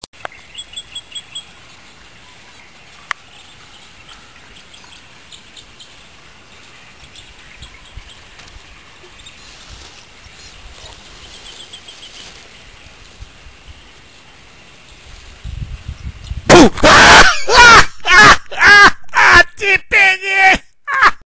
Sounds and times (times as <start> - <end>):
Speech: 19.2 - 20.6.